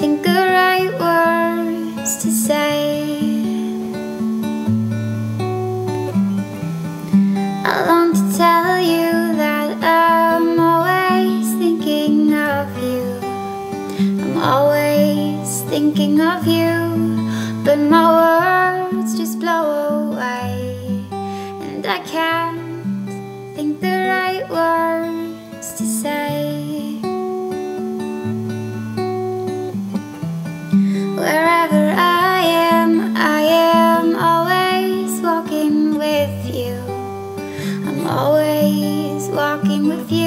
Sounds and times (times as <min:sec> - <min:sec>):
Music: 0:00.0 - 0:40.2.